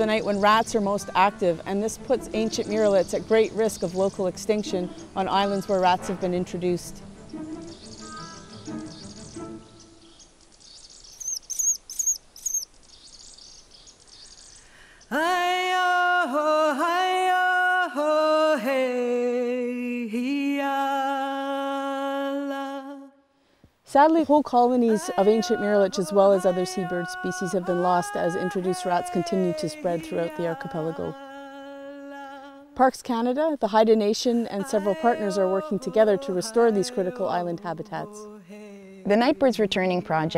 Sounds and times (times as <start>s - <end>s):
Music: 0.0s - 10.2s, 24.9s - 31.4s, 34.6s - 40.3s
Environmental noise: 0.0s - 19.7s, 20.4s - 40.3s
Bird: 7.3s - 14.8s.